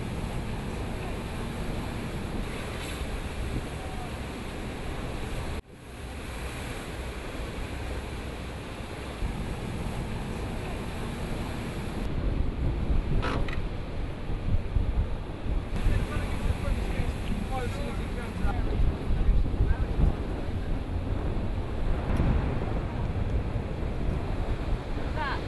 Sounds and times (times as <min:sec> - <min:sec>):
Sailboat, sailing ship: 0:00.0 - 0:25.4
Speech: 0:15.8 - 0:20.8, 0:25.0 - 0:25.4.